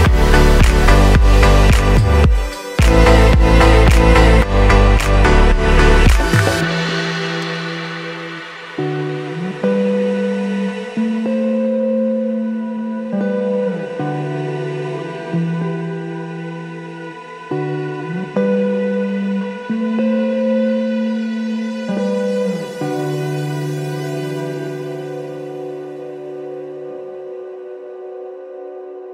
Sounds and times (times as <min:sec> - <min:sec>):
Ambient music: 0:00.0 - 0:29.1.